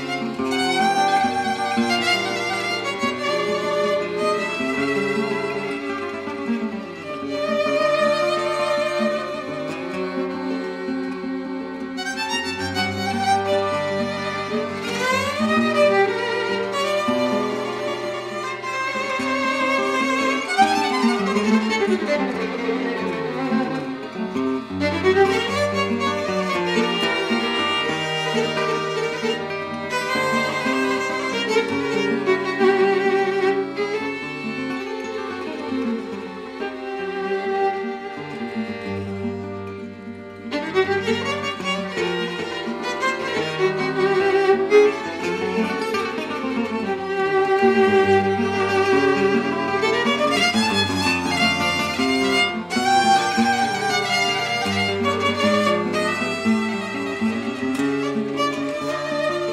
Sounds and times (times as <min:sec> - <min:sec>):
Violin, fiddle: 0:00.0 - 0:59.5.